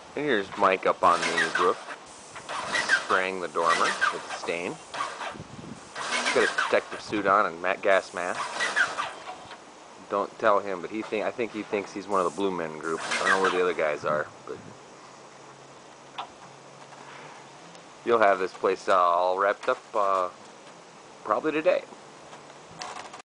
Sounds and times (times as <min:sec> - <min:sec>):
Speech: 0:00.2 - 0:01.8, 0:03.1 - 0:04.8, 0:06.3 - 0:08.4, 0:10.0 - 0:14.6, 0:18.0 - 0:20.4, 0:21.2 - 0:21.9.